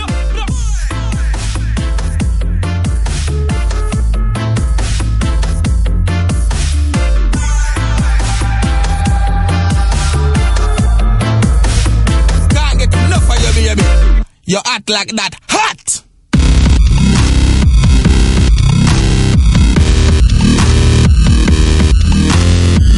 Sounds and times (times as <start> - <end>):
Dubstep: 0.0 - 14.2, 16.4 - 22.9.